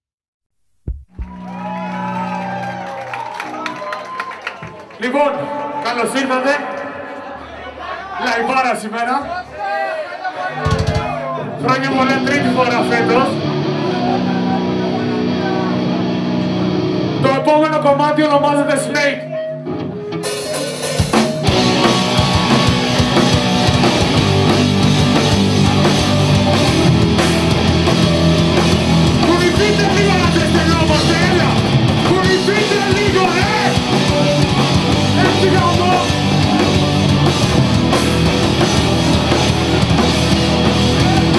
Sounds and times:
Music: 1.0s - 6.2s, 10.7s - 41.3s
Speech: 5.0s - 13.4s, 17.2s - 19.4s, 29.2s - 33.8s, 35.2s - 36.2s.

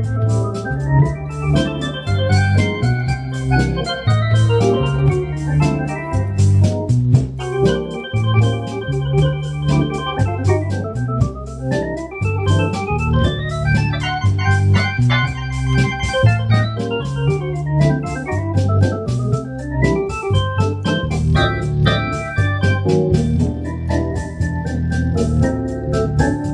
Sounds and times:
Hammond organ: 0.0s - 26.5s
Piano: 0.0s - 26.5s.

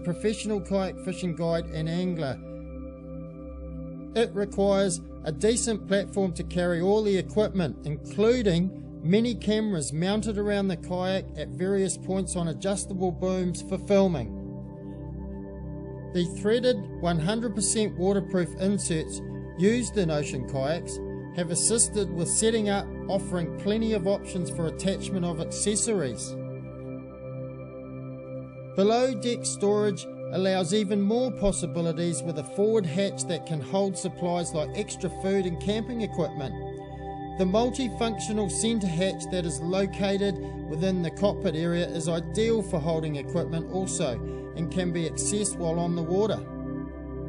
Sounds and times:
Speech: 0.0s - 2.4s, 4.2s - 14.3s, 16.2s - 26.4s, 28.8s - 36.6s, 37.4s - 46.5s
Music: 0.0s - 47.2s.

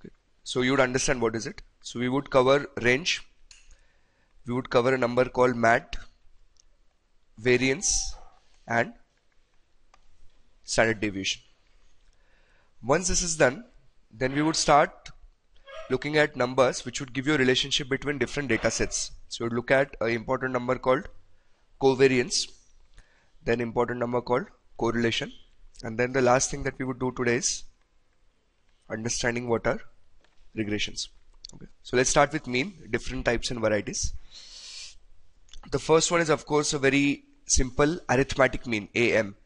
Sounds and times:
Speech: 0.0s - 3.4s, 4.5s - 6.2s, 7.4s - 9.1s, 10.7s - 11.5s, 12.8s - 21.2s, 21.8s - 22.6s, 23.4s - 27.7s, 28.9s - 30.0s, 30.6s - 34.2s, 35.6s - 39.4s.

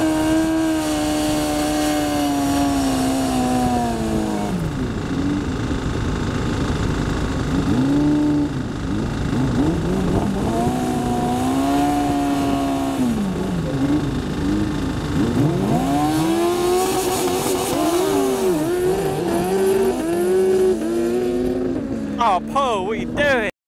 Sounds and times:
Speech: 22.2s - 23.6s.

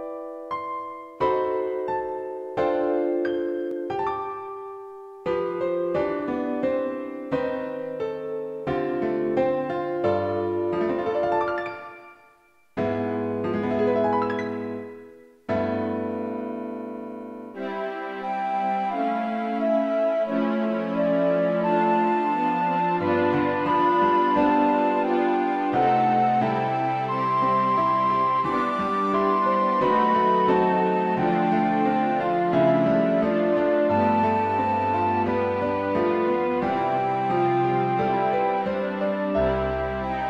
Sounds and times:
Background music: 0.0s - 40.3s
Theme music: 17.6s - 40.3s.

